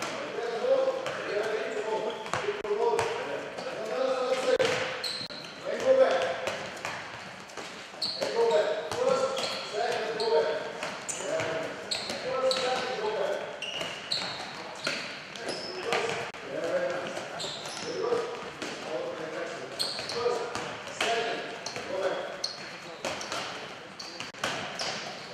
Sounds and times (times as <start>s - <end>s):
Speech: 0.0s - 4.8s, 5.6s - 6.4s, 8.2s - 13.5s, 14.5s - 24.4s.